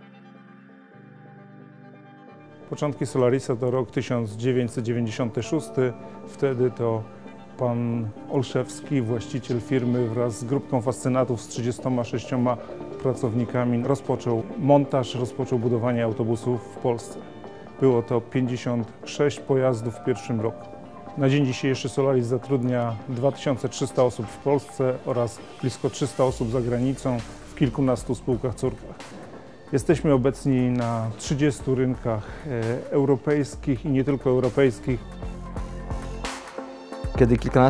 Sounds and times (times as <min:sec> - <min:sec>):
Music: 0:00.0 - 0:37.6
Speech: 0:02.7 - 0:17.2, 0:17.8 - 0:20.6, 0:21.2 - 0:29.0, 0:29.7 - 0:35.1, 0:37.2 - 0:37.6.